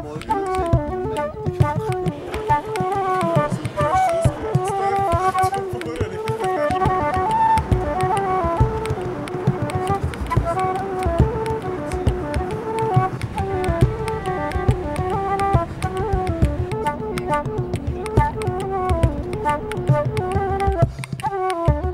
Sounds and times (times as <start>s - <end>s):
Music: 0.0s - 21.9s.